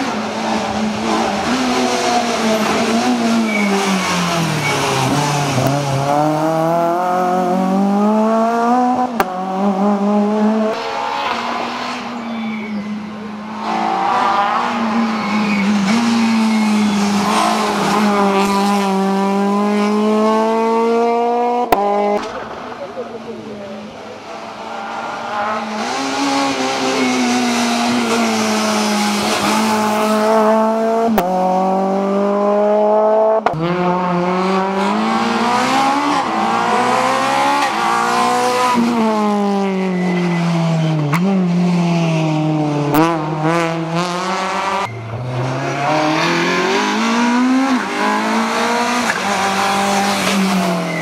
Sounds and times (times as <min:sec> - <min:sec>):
Accelerating, revving, vroom: 0:00.0 - 0:12.1, 0:13.6 - 0:22.2, 0:24.6 - 0:51.0
Car: 0:00.0 - 0:51.0
Speech: 0:22.3 - 0:24.2.